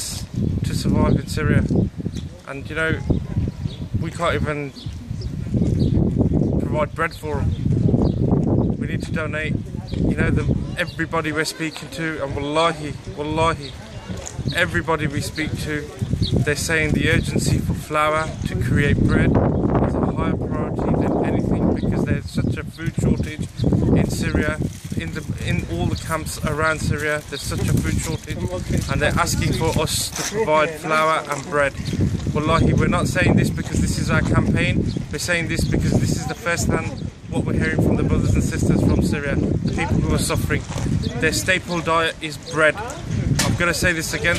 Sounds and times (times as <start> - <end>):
Speech: 0.0 - 1.7, 2.4 - 3.1, 4.0 - 4.8, 6.6 - 7.5, 8.8 - 44.3.